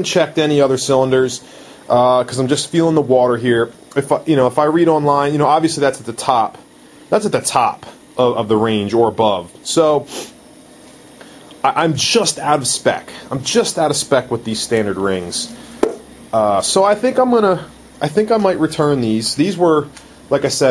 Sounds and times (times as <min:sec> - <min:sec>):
Speech: 0:00.0 - 0:10.3, 0:11.6 - 0:15.6, 0:16.3 - 0:20.7
Inside, small room: 0:00.0 - 0:20.7.